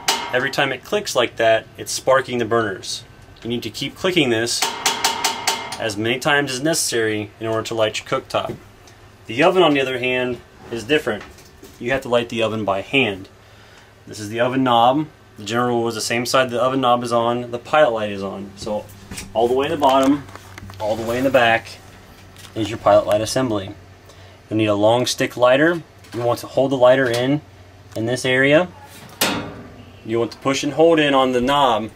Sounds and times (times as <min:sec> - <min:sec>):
Speech: 0:00.3 - 0:04.7, 0:05.8 - 0:08.6, 0:09.3 - 0:13.3, 0:14.1 - 0:21.8, 0:22.5 - 0:23.8, 0:24.5 - 0:28.9, 0:30.0 - 0:31.9.